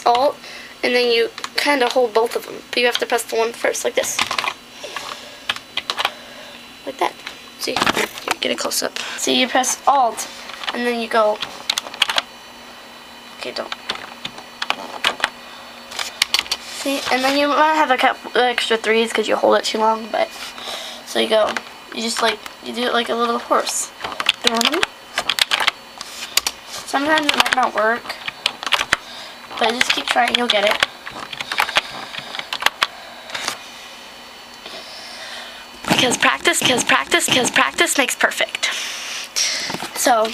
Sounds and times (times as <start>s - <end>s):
Speech: 0.0s - 4.2s, 6.8s - 11.4s, 13.4s - 13.7s, 16.8s - 20.3s, 21.1s - 24.9s, 26.9s - 28.2s, 29.6s - 30.8s, 35.9s - 38.7s, 40.0s - 40.3s.